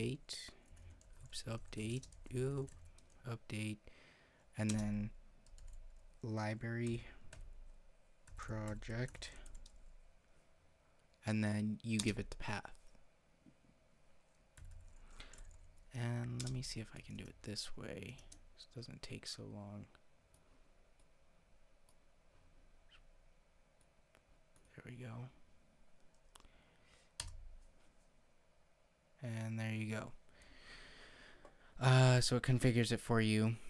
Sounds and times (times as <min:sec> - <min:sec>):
Speech: 0:00.0 - 0:00.6, 0:01.3 - 0:03.8, 0:04.6 - 0:05.2, 0:06.2 - 0:07.2, 0:08.4 - 0:09.4, 0:11.2 - 0:12.8, 0:15.9 - 0:20.0, 0:24.7 - 0:25.4, 0:29.2 - 0:30.2, 0:31.8 - 0:33.6
Inside, small room: 0:00.0 - 0:33.6.